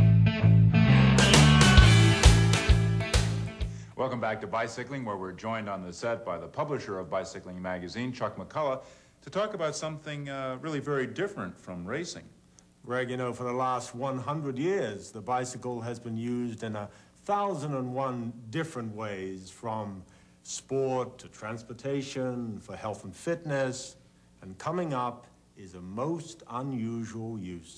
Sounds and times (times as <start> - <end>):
Speech: 4.0 - 27.7.